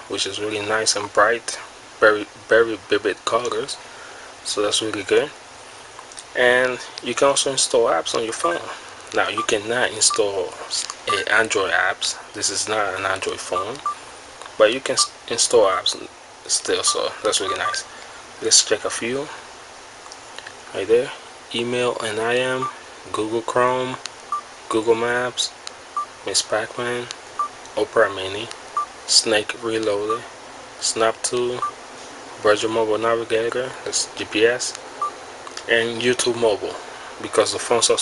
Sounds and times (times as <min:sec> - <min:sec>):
Speech: 0:00.0 - 0:03.8, 0:04.4 - 0:05.4, 0:06.2 - 0:13.9, 0:14.5 - 0:19.4, 0:20.7 - 0:24.1, 0:24.7 - 0:25.6, 0:26.2 - 0:27.2, 0:27.8 - 0:31.7, 0:32.4 - 0:34.8, 0:35.6 - 0:38.0.